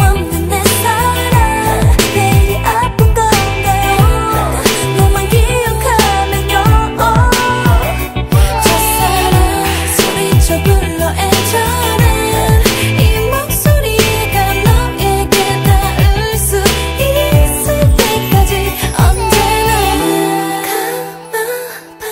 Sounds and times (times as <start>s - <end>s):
Music: 0.0s - 22.1s.